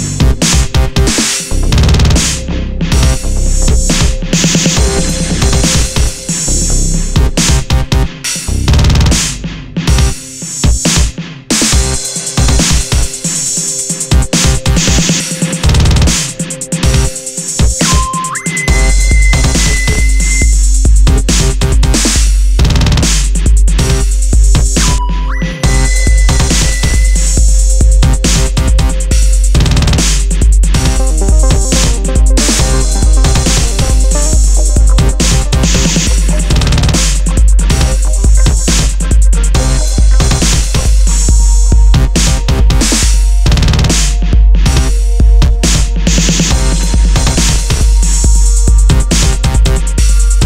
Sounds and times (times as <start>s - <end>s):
Music: 0.0s - 50.4s.